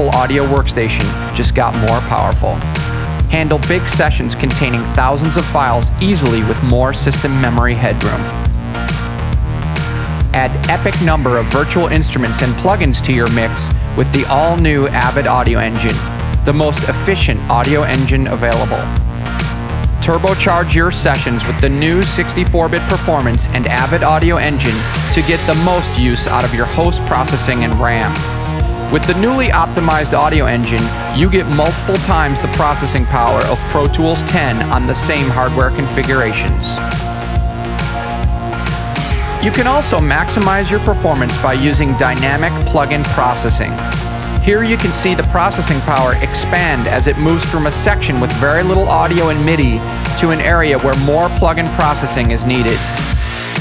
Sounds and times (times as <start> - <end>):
Speech: 0.0 - 2.6, 3.2 - 8.4, 10.3 - 18.9, 20.0 - 28.3, 28.9 - 36.8, 39.4 - 43.8, 44.4 - 52.9
Music: 0.0 - 53.6.